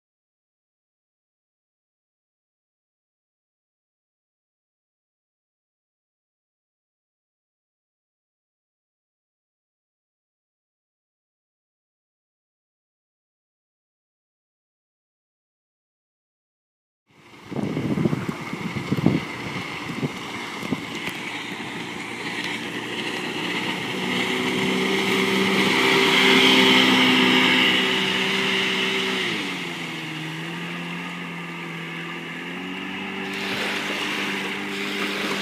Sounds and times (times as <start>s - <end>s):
Motorboat, speedboat: 17.1s - 35.4s.